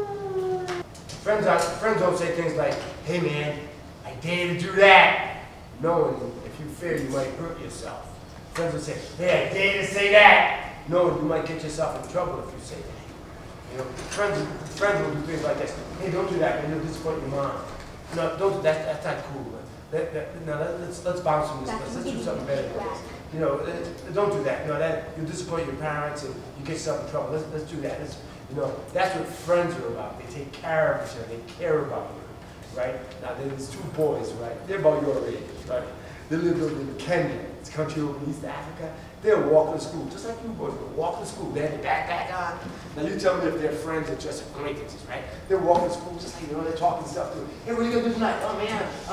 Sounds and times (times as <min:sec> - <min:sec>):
Speech: 0:00.0 - 0:13.1, 0:13.7 - 0:49.1.